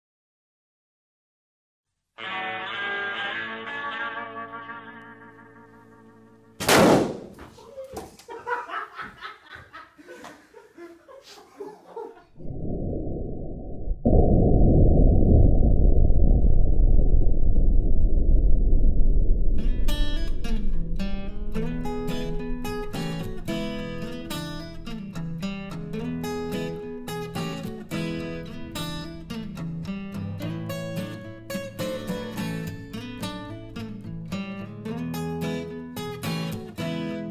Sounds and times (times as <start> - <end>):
Music: 2.2 - 6.6, 19.6 - 37.3.